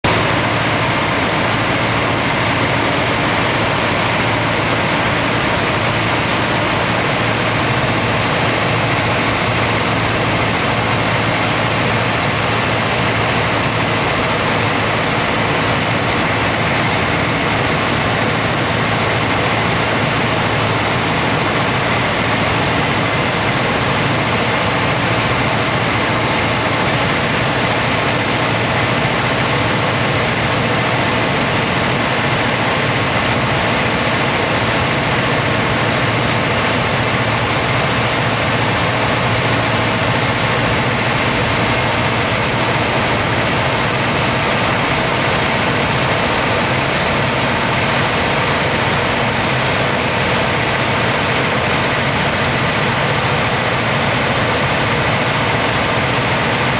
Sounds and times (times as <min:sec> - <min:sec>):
Aircraft: 0:00.0 - 0:56.7.